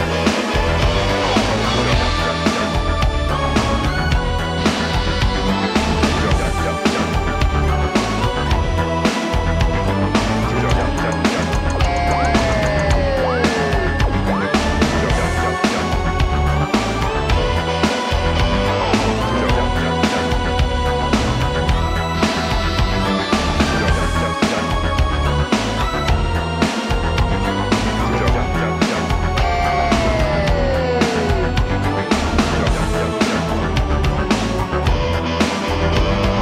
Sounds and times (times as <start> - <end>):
Music: 0.0 - 36.4.